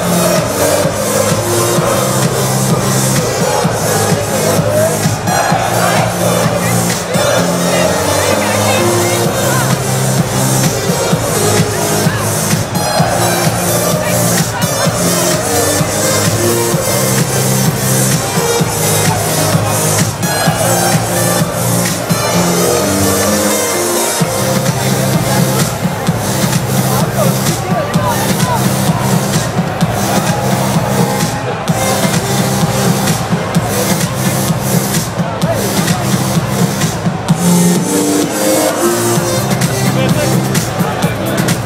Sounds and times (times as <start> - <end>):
Techno: 0.0 - 41.6.